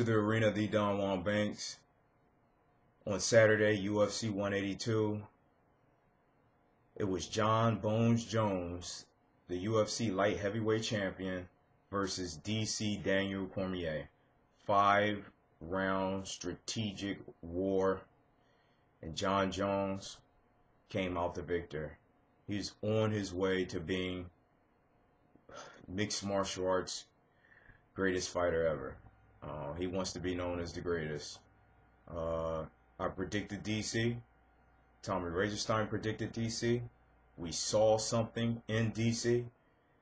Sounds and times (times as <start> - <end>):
Speech: 0.0 - 1.9, 3.0 - 5.4, 7.0 - 18.1, 19.0 - 20.2, 20.9 - 24.4, 25.9 - 27.2, 28.0 - 31.5, 32.1 - 34.3, 35.0 - 39.6.